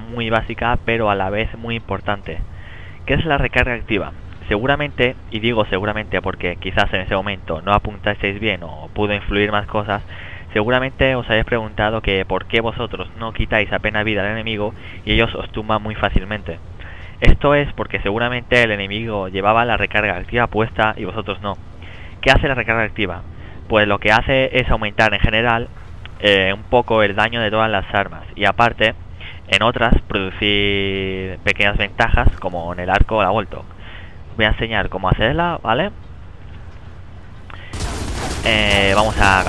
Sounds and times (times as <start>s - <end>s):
Speech: 0.0s - 36.0s, 37.5s - 39.4s.